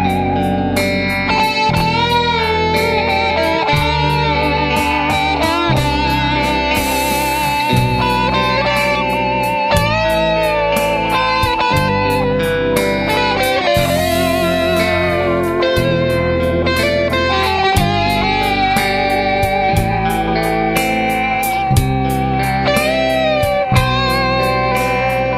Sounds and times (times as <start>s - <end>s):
Electric guitar: 0.0s - 25.3s.